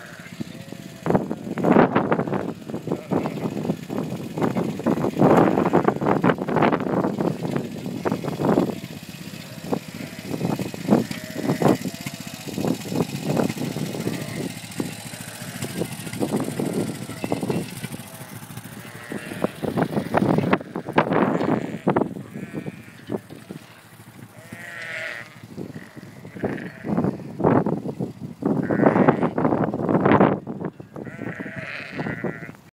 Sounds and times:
Bleat: 0.0 - 1.2, 2.3 - 3.6, 5.3 - 6.0, 9.5 - 10.4, 11.0 - 12.1, 14.0 - 14.5, 18.2 - 23.2, 24.4 - 27.1, 28.6 - 29.4, 30.9 - 32.6
Domestic animals, pets: 31.0 - 32.6.

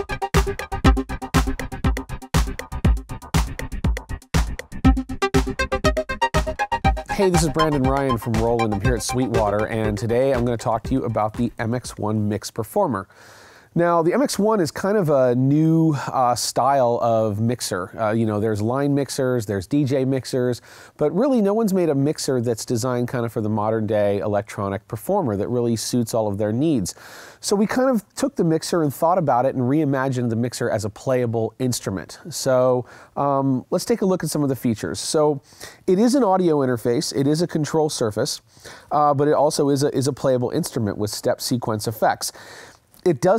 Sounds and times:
Music: 0.0 - 12.1
Speech: 7.1 - 13.1, 13.8 - 42.4, 43.0 - 43.3.

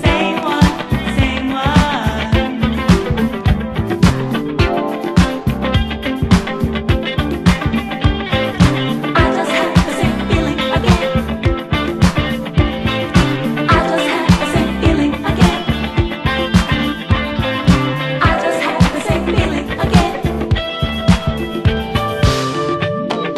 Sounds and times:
Exciting music: 2.9 - 23.3.

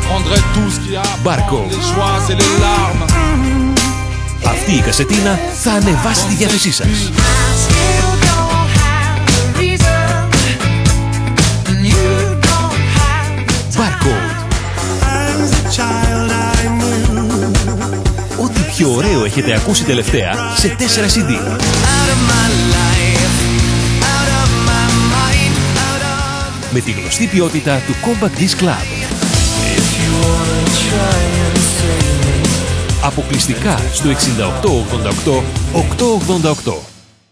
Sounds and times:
Speech: 0.0 - 2.8, 4.4 - 7.2, 13.7 - 14.4, 18.4 - 21.6, 26.7 - 28.9, 33.0 - 36.9
Music: 0.0 - 37.3.

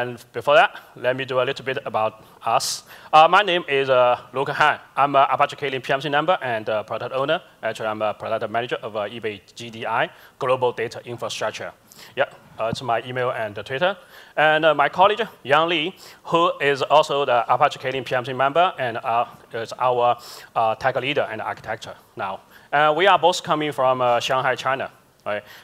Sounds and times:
Speech: 0.0 - 25.5.

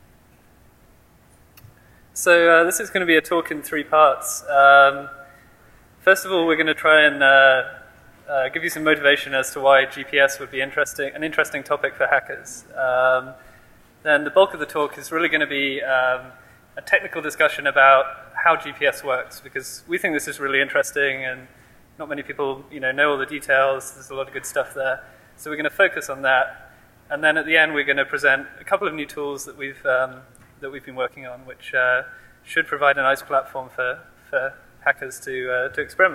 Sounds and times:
Speech: 2.2 - 5.2, 6.0 - 13.4, 14.0 - 36.1.

